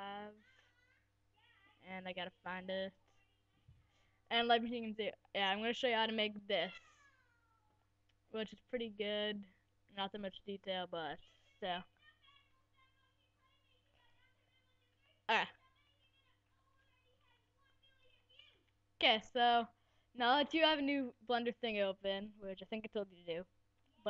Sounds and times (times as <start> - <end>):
Speech: 0.0 - 3.0, 4.3 - 6.9, 8.4 - 23.4.